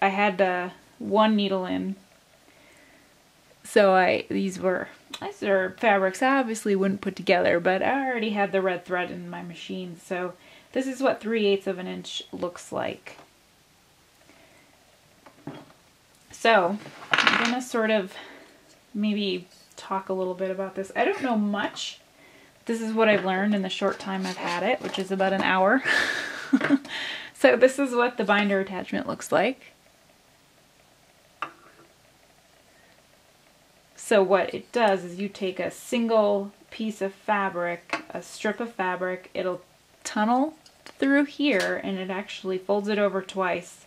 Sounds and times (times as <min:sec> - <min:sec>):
Speech: 0:00.0 - 0:02.0, 0:03.6 - 0:13.2, 0:16.3 - 0:18.3, 0:19.0 - 0:22.0, 0:22.7 - 0:25.8, 0:27.4 - 0:29.7, 0:34.0 - 0:43.8.